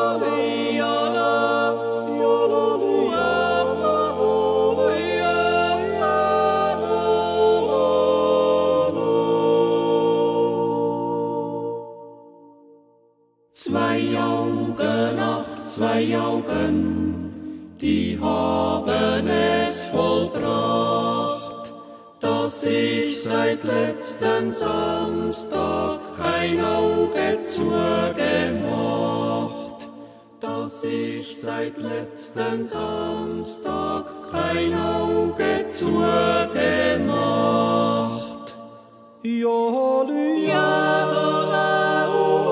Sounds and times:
Music: 0.0 - 42.5
Singing: 13.6 - 42.5.

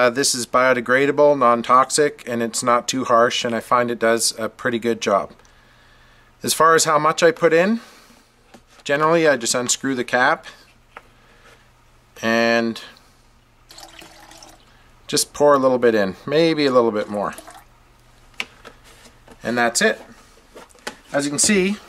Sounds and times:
Speech: 0.0 - 5.4, 6.4 - 7.9, 8.8 - 10.6, 12.2 - 13.0, 15.1 - 17.5, 19.4 - 20.2, 21.1 - 21.8
Inside, small room: 0.0 - 21.8.

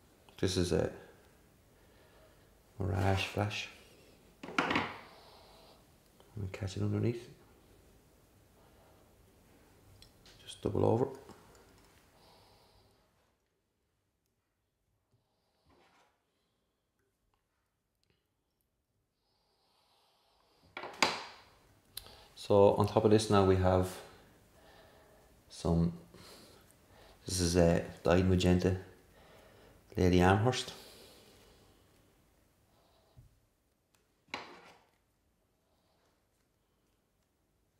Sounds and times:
Speech: 0.4 - 1.1, 2.8 - 3.8, 6.4 - 7.4, 10.4 - 11.3, 22.4 - 24.2, 25.5 - 26.1, 27.2 - 29.0, 30.0 - 30.8.

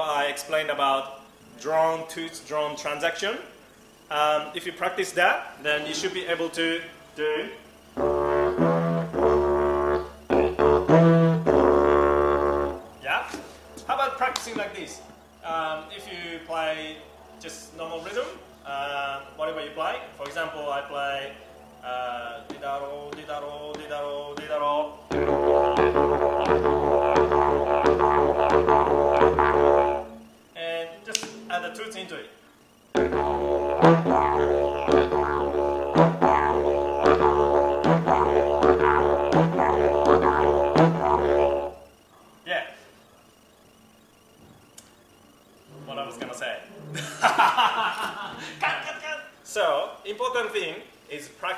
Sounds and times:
Speech: 0.0 - 3.5, 4.1 - 7.6, 13.0 - 25.0, 30.6 - 32.3, 42.5 - 42.9, 45.8 - 46.7, 48.6 - 51.5
Didgeridoo: 7.5 - 31.9, 32.9 - 42.1, 45.7 - 47.3.

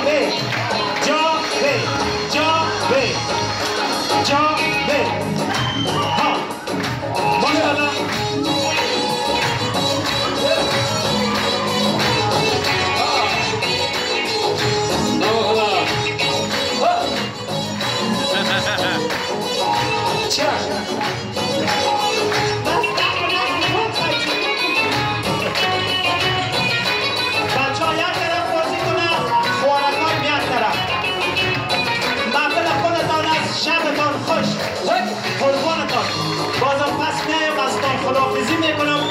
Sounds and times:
Music: 0.0 - 39.1.

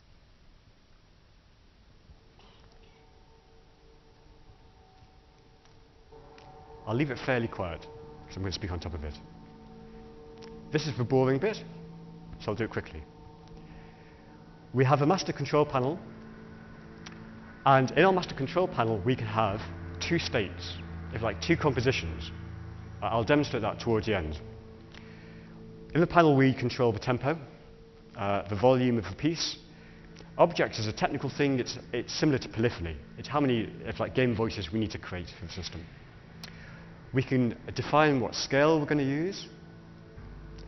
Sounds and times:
Speech: 6.9 - 9.2, 10.7 - 11.7, 12.4 - 13.1, 14.8 - 16.0, 17.7 - 22.3, 23.0 - 24.4, 25.9 - 27.5, 28.2 - 29.6, 30.4 - 35.9, 37.1 - 39.6.

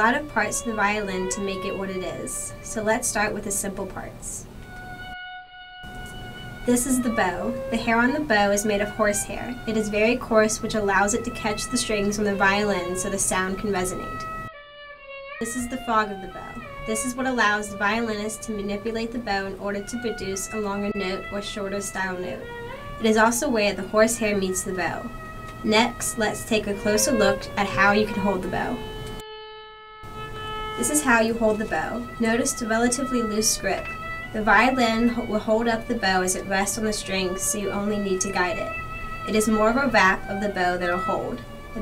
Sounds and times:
Speech: 0.0 - 4.5, 6.7 - 14.3, 15.4 - 28.8, 30.8 - 41.8.

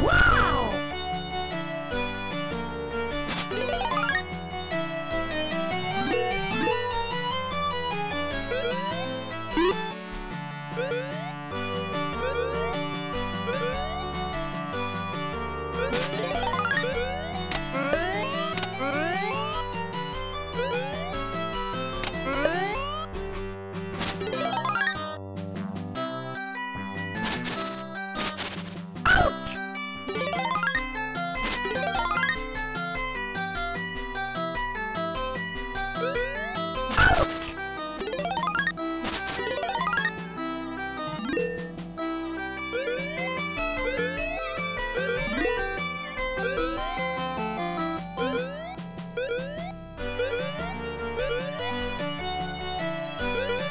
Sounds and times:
Music: 0.0 - 53.7.

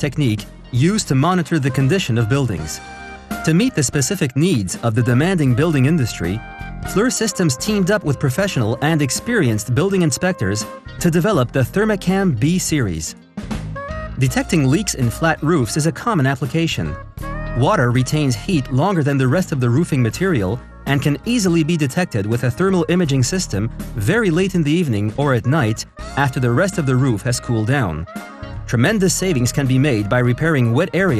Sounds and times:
Speech: 0.0 - 2.8, 3.4 - 13.2, 14.2 - 17.0, 17.6 - 28.1, 28.7 - 31.2
Music: 0.0 - 31.2.

